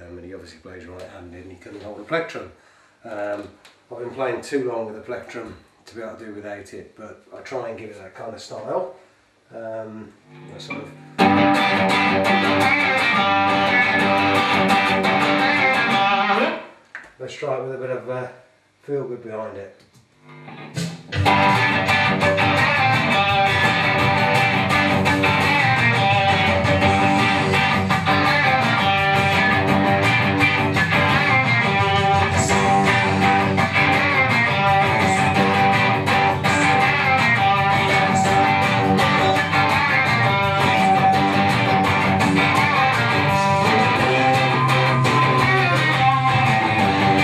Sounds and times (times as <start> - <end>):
Speech: 0.0 - 11.0, 17.2 - 19.8
Strum: 10.3 - 16.7, 20.5 - 47.2
Electric guitar: 10.3 - 16.8, 20.3 - 47.2.